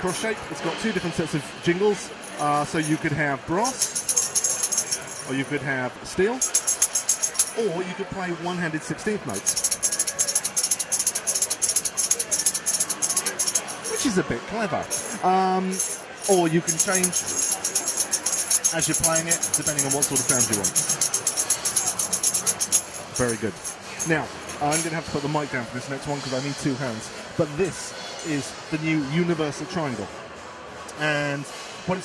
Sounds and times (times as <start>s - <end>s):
Speech: 0.0s - 3.9s, 5.2s - 6.5s, 7.6s - 9.6s, 11.1s - 21.1s, 23.1s - 30.2s, 30.9s - 32.0s.